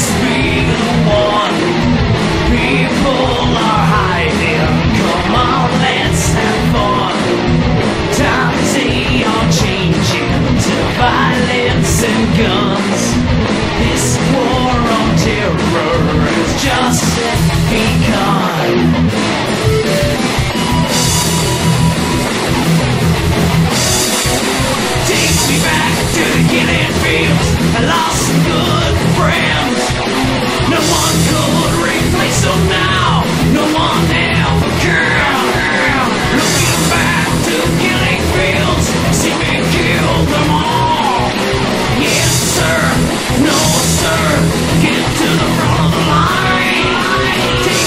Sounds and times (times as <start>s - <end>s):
Exciting music: 0.0s - 47.8s
Rhythm and blues: 0.0s - 47.8s.